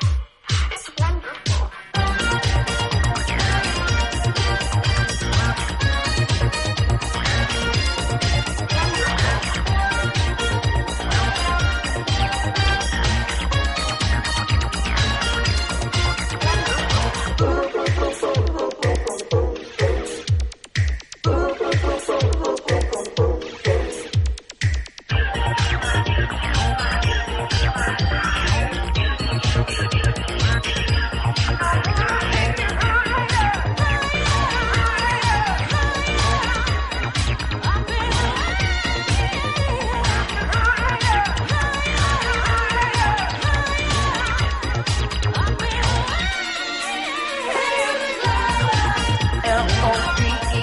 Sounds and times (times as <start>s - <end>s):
Pop music: 0.0s - 50.6s.